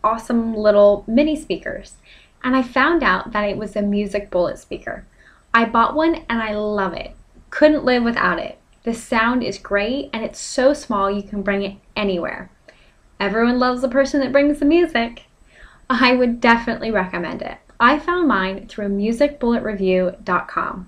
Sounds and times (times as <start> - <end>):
Speech: 0.0 - 5.0, 5.6 - 12.5, 13.2 - 15.2, 15.9 - 20.8.